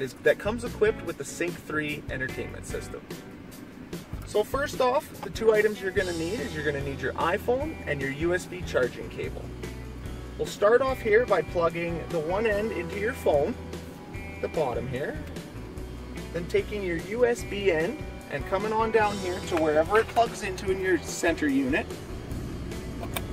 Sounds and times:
Speech: 0.0s - 3.0s, 4.3s - 9.5s, 10.4s - 13.6s, 14.4s - 15.3s, 16.3s - 21.9s
Music: 0.0s - 23.3s.

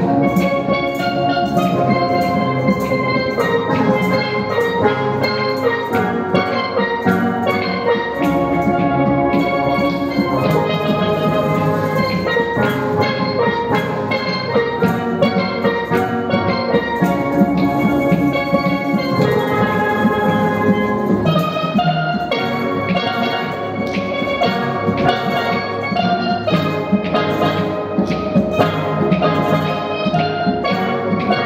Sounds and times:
Drum: 0.0s - 31.4s
Steelpan: 0.0s - 31.4s.

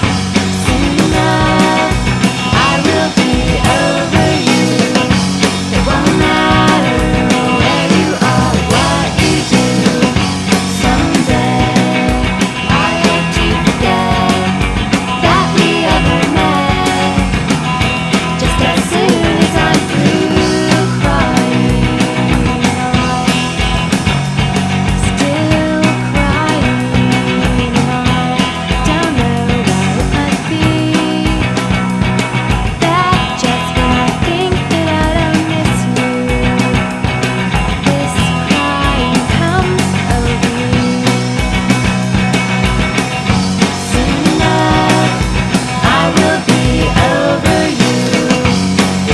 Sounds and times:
Music: 0.0s - 49.1s.

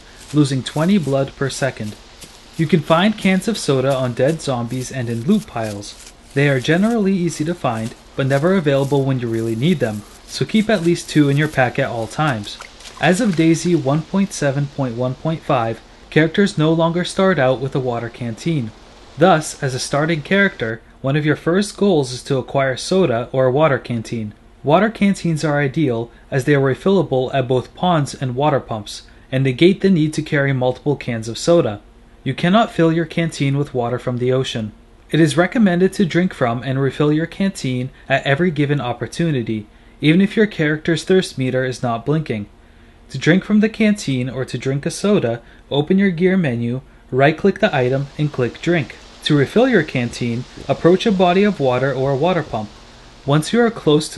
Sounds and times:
Speech: 0.0s - 2.0s, 2.6s - 54.1s.

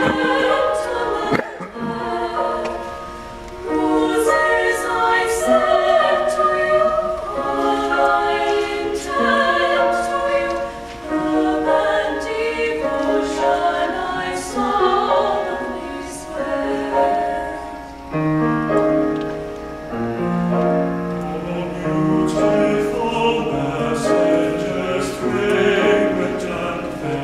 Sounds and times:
Choir: 0.0s - 19.1s, 20.2s - 27.2s
Male singing: 21.3s - 27.2s.

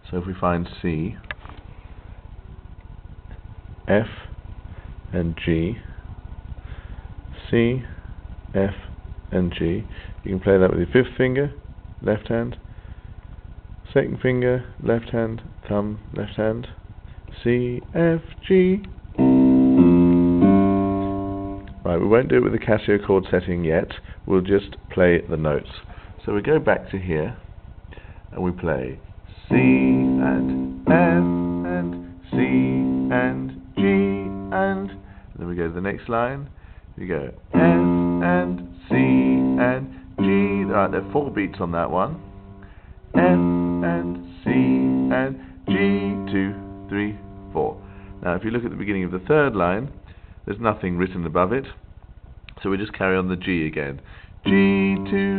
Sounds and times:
Electric piano: 19.2s - 22.0s, 29.5s - 35.2s, 37.5s - 49.5s.

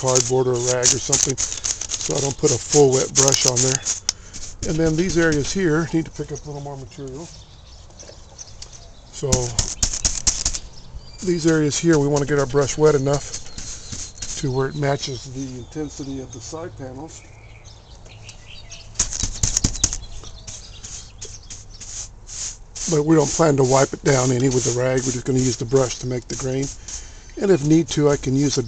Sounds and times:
Speech: 0.0s - 1.4s, 2.1s - 3.9s, 4.6s - 7.4s, 9.2s - 9.6s, 11.2s - 13.3s, 14.4s - 17.2s, 22.9s - 26.8s, 27.4s - 28.6s.

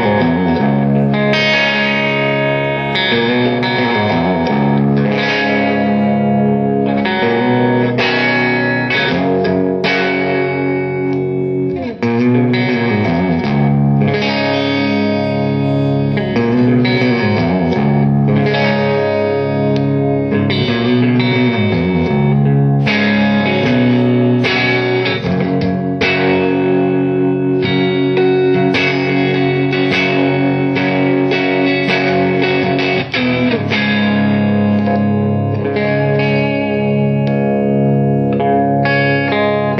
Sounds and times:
Electric guitar: 0.0s - 39.7s
Strum: 0.0s - 39.7s.

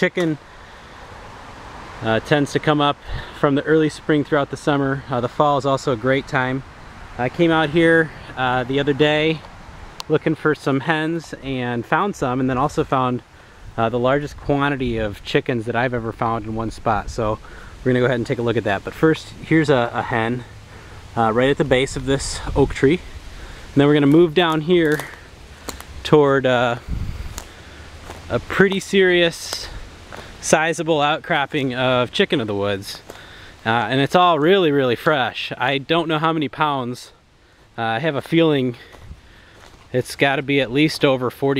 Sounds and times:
Speech: 0.0s - 0.4s, 2.0s - 20.5s, 21.2s - 23.1s, 23.8s - 25.3s, 26.0s - 26.9s, 28.3s - 29.8s, 30.4s - 37.2s, 37.8s - 39.0s, 39.9s - 41.5s.

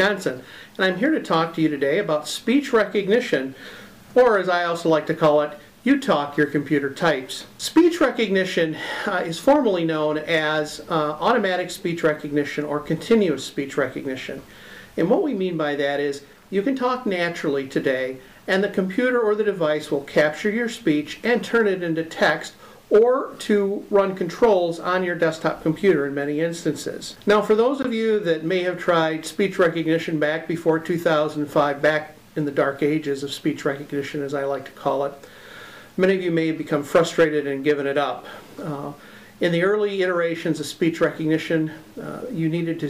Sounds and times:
Male speech, man speaking: 0.0s - 3.6s, 4.2s - 14.4s, 15.0s - 35.2s, 36.0s - 42.9s
Narration, monologue: 0.0s - 42.9s.

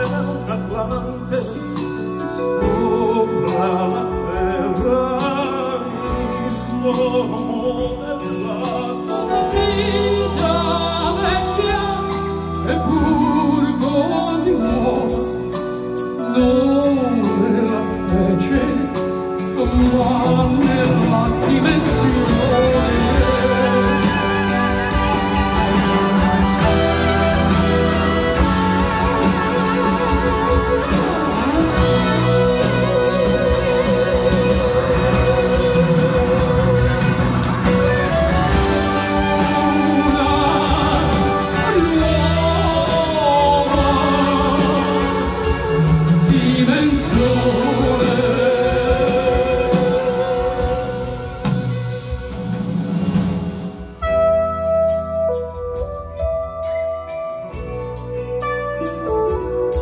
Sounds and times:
Drum kit: 0.0s - 59.8s
Progressive rock: 0.0s - 59.8s.

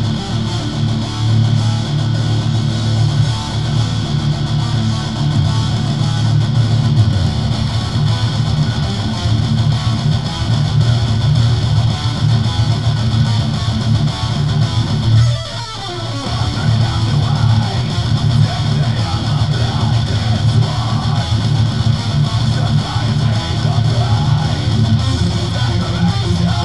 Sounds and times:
Bass guitar: 0.0s - 26.6s
Strum: 0.0s - 26.6s.

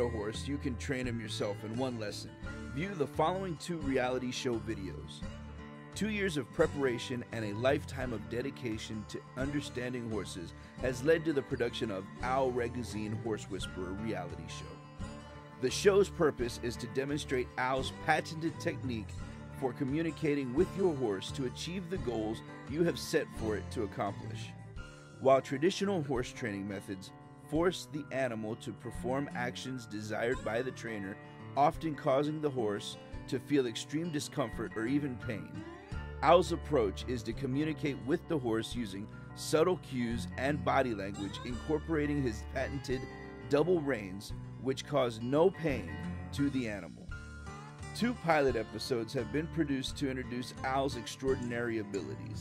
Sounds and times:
Speech: 0.0s - 5.2s, 6.0s - 14.8s, 15.6s - 24.6s, 25.2s - 47.1s, 48.0s - 52.4s
Music: 0.0s - 52.4s.

